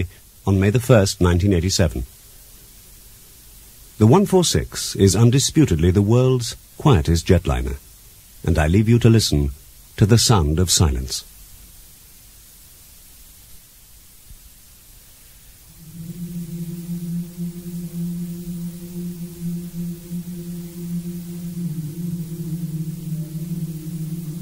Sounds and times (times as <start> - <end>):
Speech: 0.0 - 2.1, 4.0 - 7.8, 8.4 - 11.3.